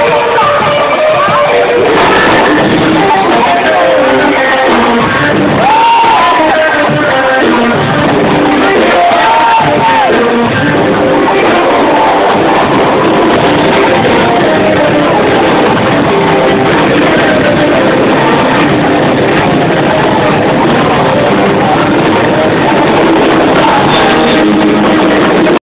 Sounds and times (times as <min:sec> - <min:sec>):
Guitar: 0:00.0 - 0:25.6.